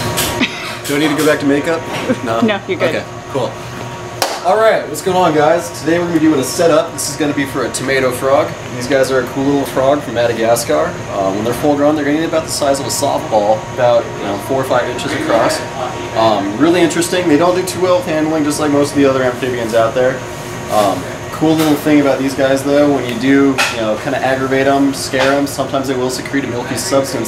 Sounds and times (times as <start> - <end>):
Speech: 4.4 - 27.2.